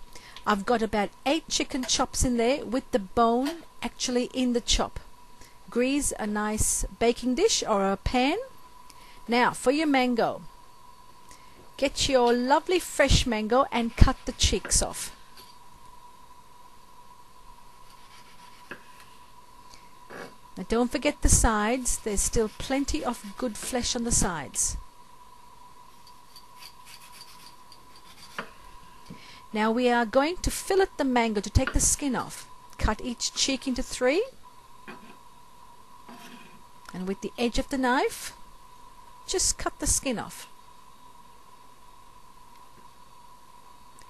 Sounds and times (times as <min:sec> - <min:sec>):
Speech: 0:00.5 - 0:05.0, 0:05.7 - 0:08.5, 0:09.3 - 0:10.5, 0:11.8 - 0:15.1, 0:20.6 - 0:24.8, 0:29.5 - 0:34.4, 0:36.9 - 0:38.4, 0:39.3 - 0:40.5.